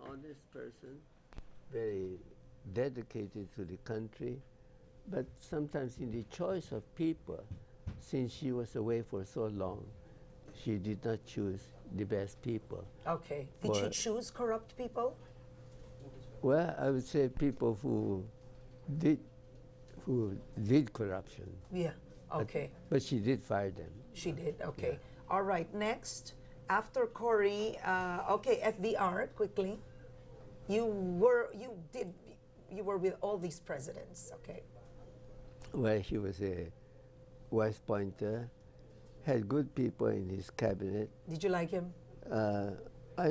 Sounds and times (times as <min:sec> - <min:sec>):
Speech: 0:10.6 - 0:14.0, 0:35.8 - 0:36.7.